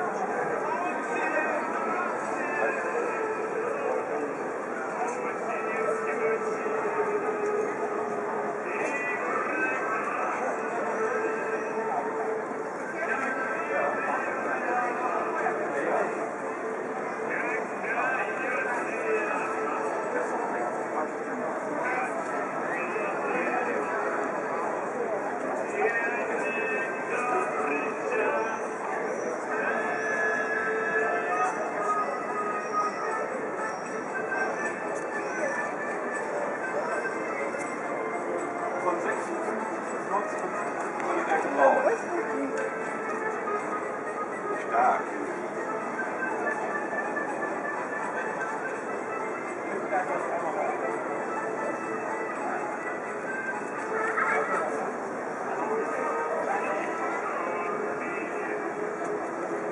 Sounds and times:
Speech: 0:00.0 - 0:47.0, 0:47.8 - 0:59.7.

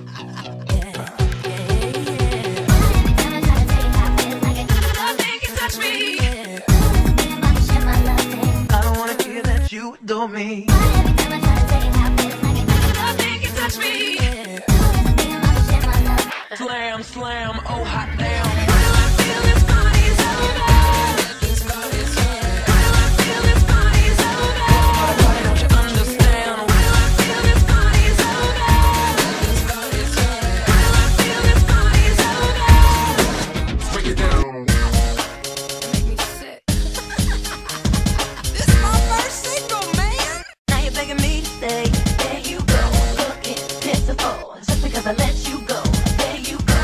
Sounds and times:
Hip hop music: 0:00.0 - 0:46.8.

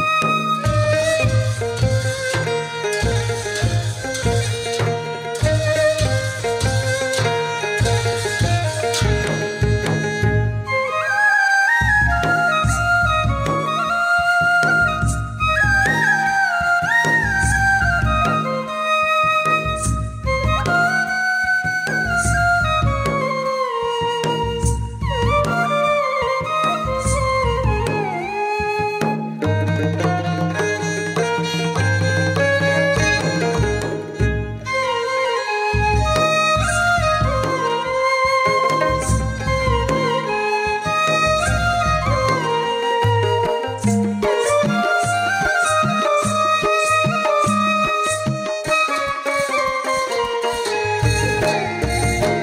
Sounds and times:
Traditional music: 0:00.0 - 0:52.4.

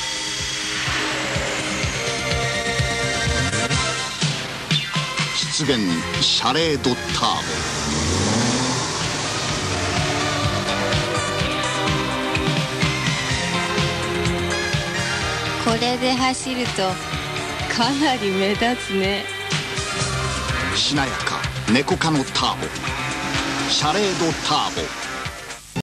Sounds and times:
Music: 0:00.0 - 0:25.8
Speech: 0:05.4 - 0:07.6, 0:17.7 - 0:19.2, 0:20.8 - 0:22.7, 0:23.7 - 0:24.9.

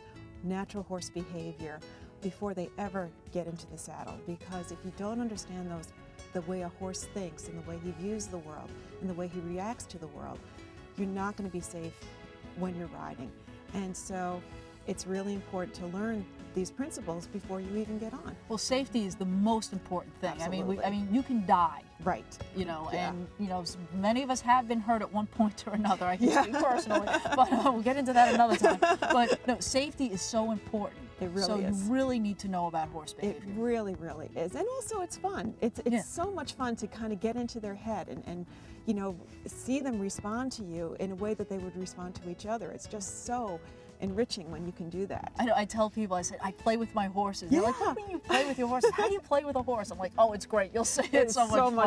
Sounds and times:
Music: 0:00.0 - 0:51.8
Speech: 0:12.6 - 0:51.8.

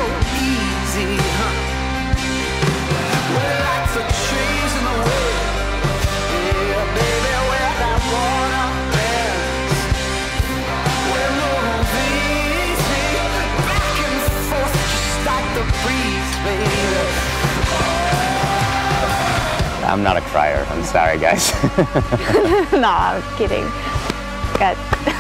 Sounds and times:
Music: 0:00.0 - 0:25.2.

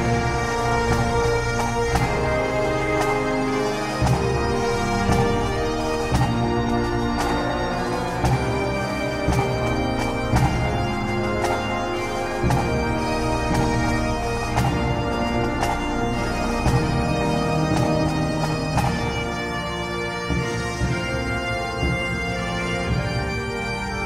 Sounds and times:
Bagpipes: 0:00.0 - 0:24.0
Theme music: 0:00.0 - 0:24.0.

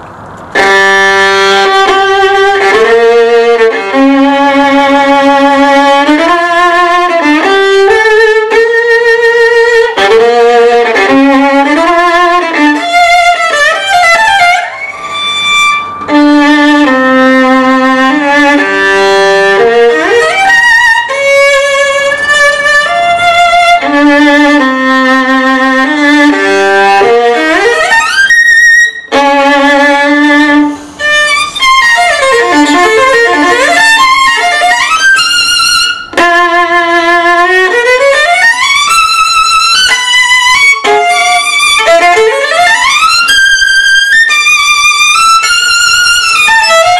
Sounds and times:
Violin, fiddle: 0:00.4 - 0:46.9.

